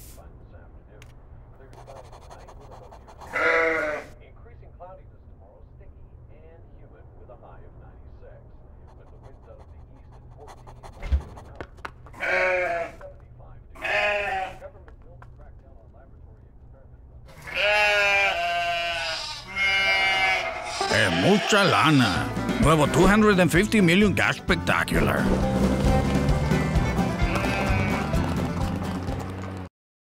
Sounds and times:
Speech: 0.2s - 3.0s, 4.1s - 11.7s, 20.9s - 25.4s
Sheep: 2.4s - 4.2s, 8.9s - 14.8s, 17.3s - 22.2s, 27.2s - 28.4s
Music: 20.8s - 29.7s.

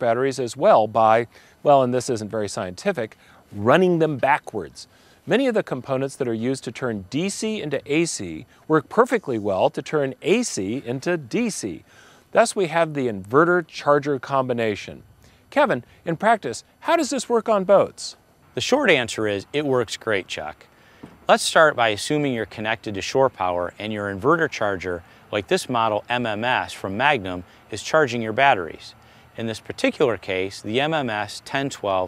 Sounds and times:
Speech: 0.0s - 11.8s, 12.4s - 20.7s, 21.3s - 32.0s.

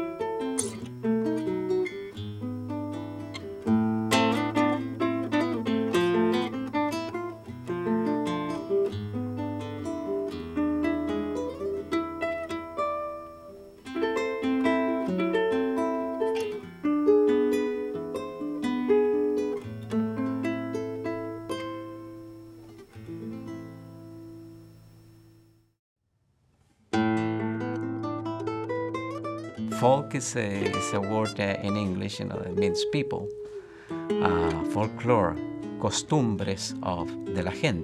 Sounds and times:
Acoustic guitar: 0.0s - 24.9s, 26.6s - 37.8s.

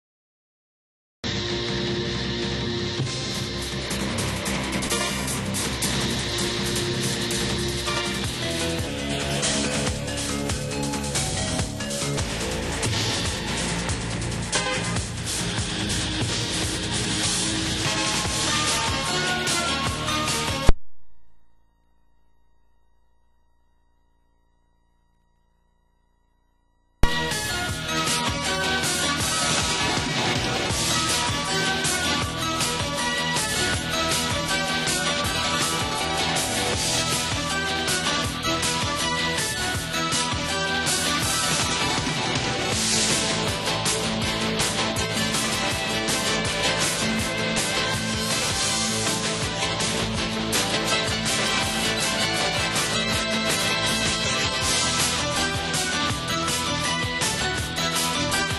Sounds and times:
Music: 1.2s - 21.5s, 27.0s - 58.5s.

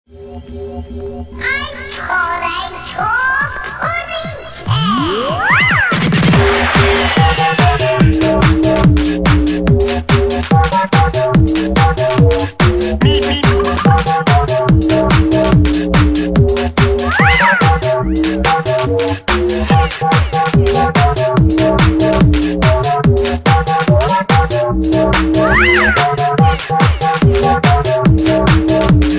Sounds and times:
Music: 0.1s - 29.1s.

